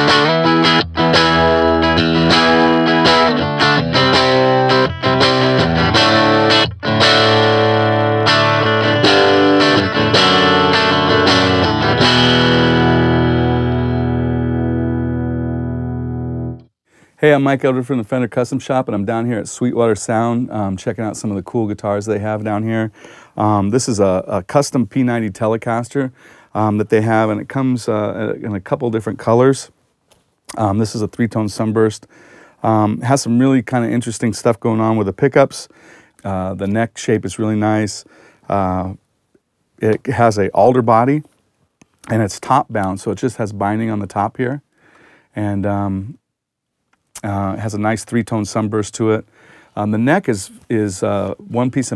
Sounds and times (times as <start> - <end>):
Speech: 17.2 - 29.8, 30.5 - 39.0, 39.8 - 41.3, 42.1 - 44.6, 45.4 - 46.2, 47.2 - 51.9.